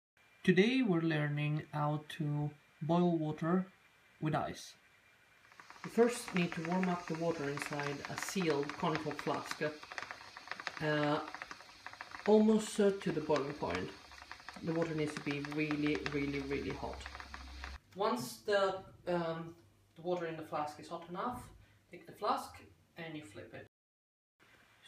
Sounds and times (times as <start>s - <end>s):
Speech: 0.5s - 4.8s, 18.0s - 23.7s
Boiling: 1.1s - 17.8s.